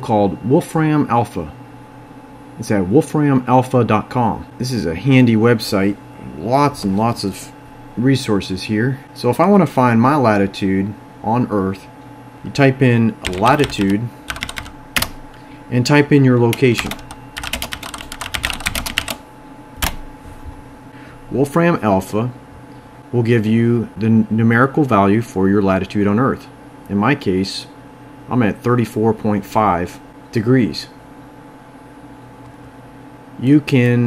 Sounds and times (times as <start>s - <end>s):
Speech: 0.0s - 1.6s, 2.6s - 14.2s, 15.7s - 17.0s, 21.3s - 22.4s, 23.1s - 31.0s, 33.4s - 34.0s.